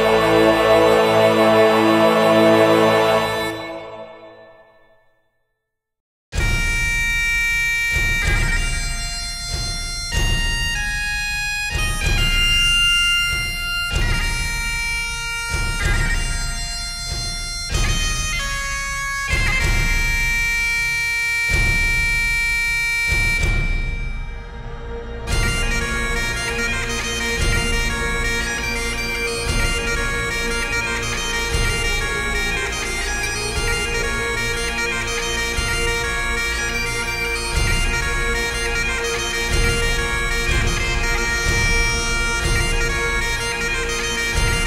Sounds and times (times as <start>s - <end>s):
Music: 0.0s - 44.6s.